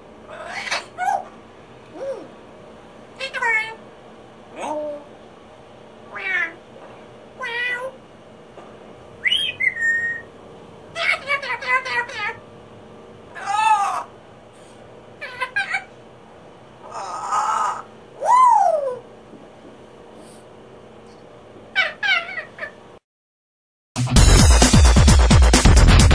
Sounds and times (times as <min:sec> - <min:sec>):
Music: 0:24.0 - 0:26.1.